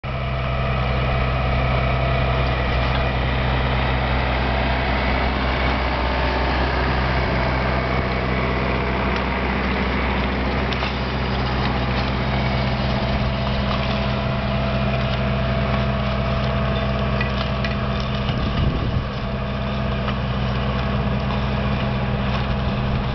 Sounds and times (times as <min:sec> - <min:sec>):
Outside, rural or natural: 0:00.0 - 0:23.1
Vehicle: 0:00.0 - 0:23.1.